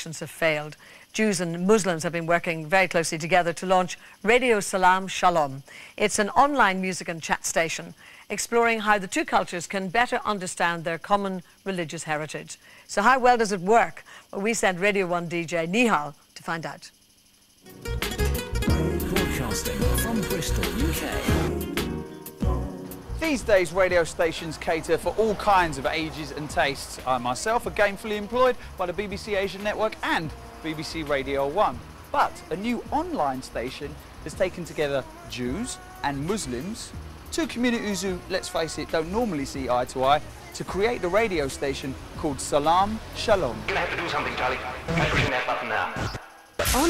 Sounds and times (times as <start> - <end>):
Speech: 0.0 - 17.0, 23.2 - 46.2
Music: 17.6 - 44.9.